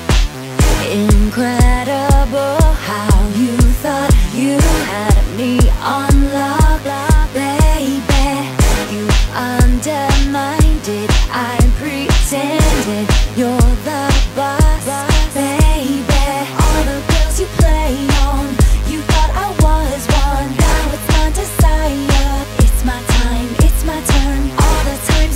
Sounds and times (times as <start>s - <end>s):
Rhythm and blues: 0.0s - 25.3s.